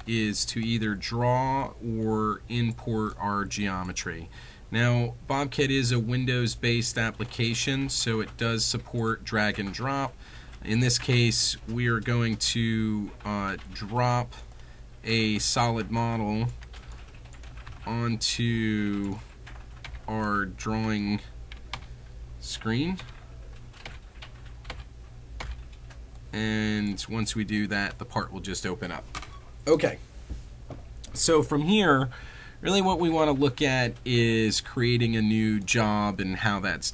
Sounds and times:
Speech: 0.0s - 14.4s, 15.0s - 16.6s, 17.8s - 19.2s, 20.1s - 21.3s, 22.4s - 23.1s, 26.3s - 29.0s, 29.7s - 30.0s, 31.1s - 36.9s.

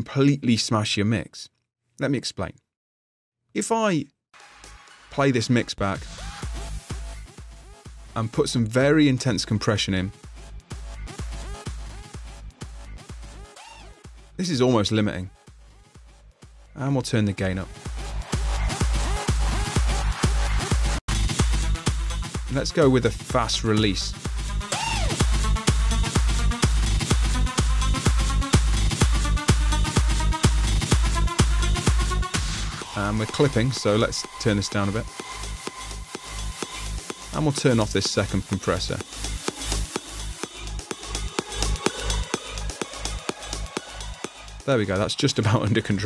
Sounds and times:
Speech: 0.0s - 2.6s, 3.6s - 4.1s, 5.1s - 6.0s, 8.2s - 10.2s, 14.4s - 15.3s, 16.8s - 17.7s, 22.5s - 24.2s, 32.8s - 35.1s, 37.4s - 39.0s, 44.7s - 46.0s
Electronic dance music: 4.4s - 46.0s.

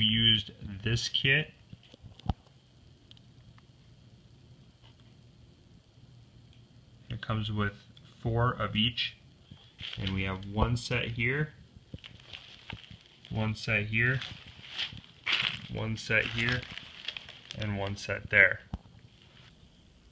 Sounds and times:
Speech: 0.0s - 1.6s, 7.1s - 9.2s, 10.0s - 11.6s, 13.3s - 14.4s, 15.6s - 16.7s, 17.6s - 18.7s
Inside, small room: 0.0s - 20.1s.

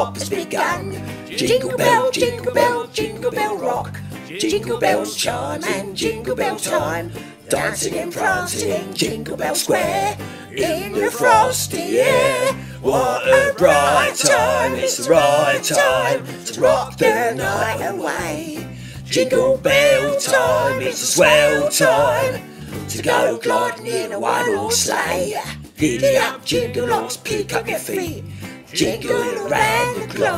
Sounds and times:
Music: 0.0s - 30.3s.

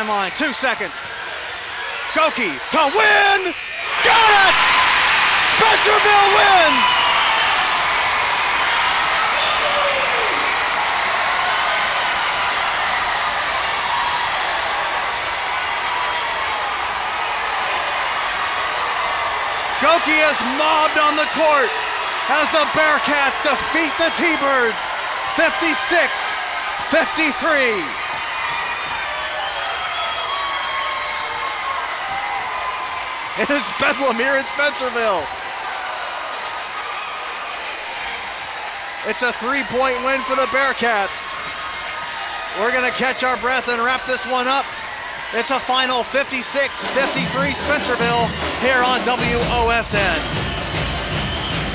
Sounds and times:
Crowd: 0.0s - 51.7s.

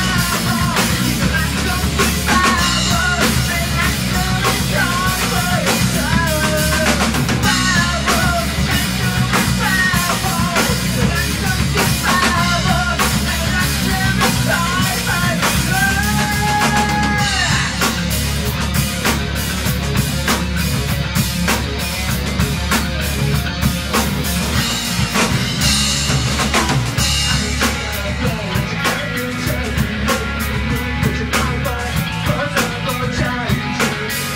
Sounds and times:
Bass drum: 0.0s - 34.3s
Drum kit: 0.0s - 34.3s.

